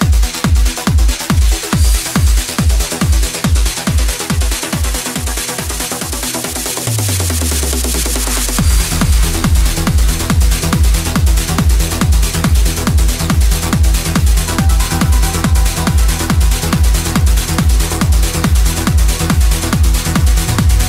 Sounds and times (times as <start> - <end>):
Techno: 0.0 - 20.8.